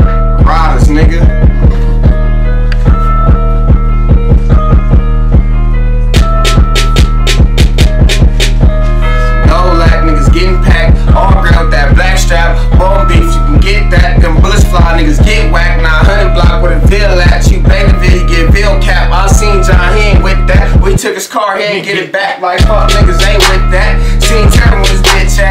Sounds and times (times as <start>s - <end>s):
Music: 0.0s - 25.5s.